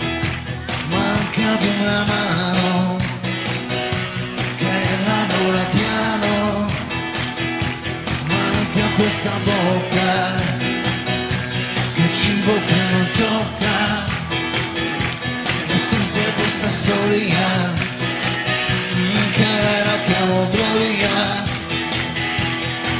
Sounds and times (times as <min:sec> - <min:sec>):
Music: 0:00.0 - 0:22.9.